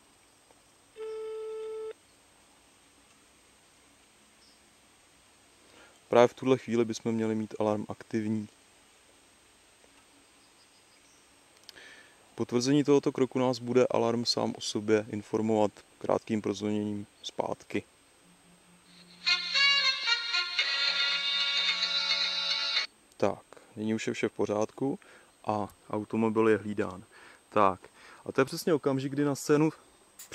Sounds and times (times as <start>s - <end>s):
Speech: 6.1s - 8.6s, 12.4s - 17.9s, 23.2s - 30.3s
Music: 18.9s - 22.9s.